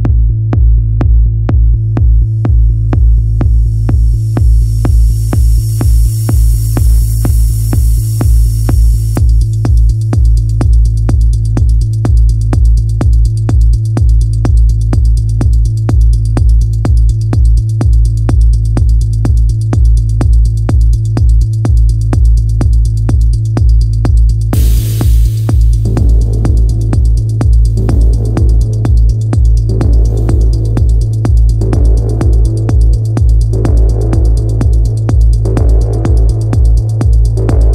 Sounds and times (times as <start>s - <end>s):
Music: 0.0s - 37.7s.